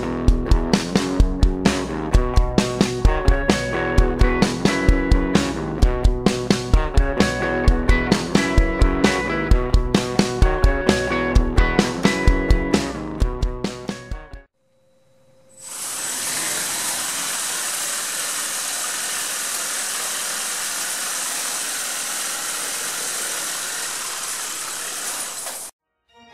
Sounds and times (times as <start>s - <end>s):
Music: 0.0s - 14.5s, 25.8s - 26.3s.